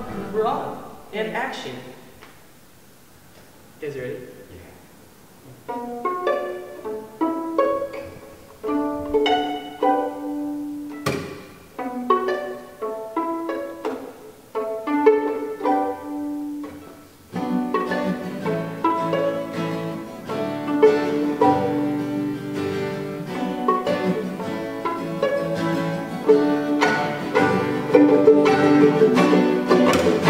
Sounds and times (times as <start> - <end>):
Pizzicato: 0.0 - 1.2, 5.4 - 30.2.